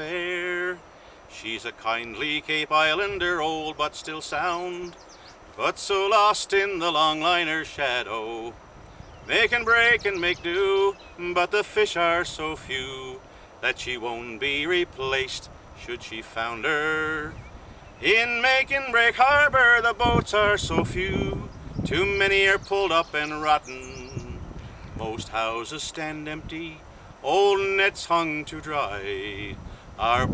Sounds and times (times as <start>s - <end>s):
Male singing: 0.0s - 5.0s, 5.6s - 8.6s, 9.3s - 17.4s, 18.0s - 24.4s, 25.0s - 30.3s.